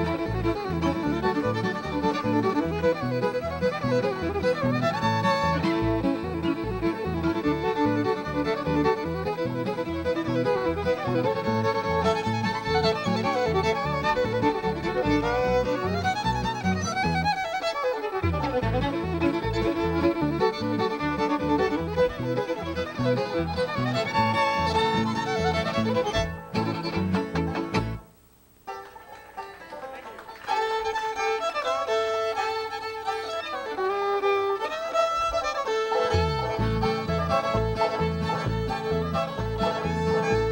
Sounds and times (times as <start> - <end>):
Pizzicato: 0.0 - 28.0, 28.8 - 40.5.